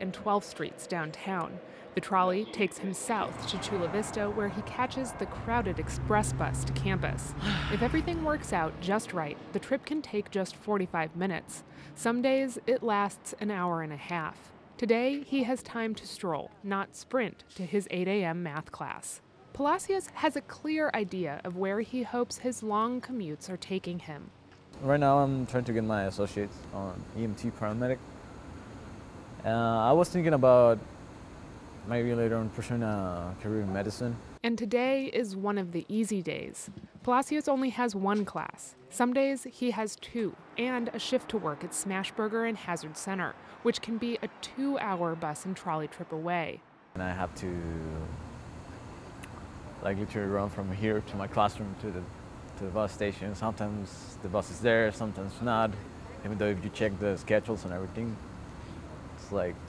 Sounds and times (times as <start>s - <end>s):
Vehicle: 0.0s - 16.6s, 19.2s - 34.4s, 39.2s - 59.6s
Speech: 0.0s - 28.0s, 29.5s - 30.8s, 31.9s - 48.1s, 49.8s - 52.0s, 52.6s - 58.2s.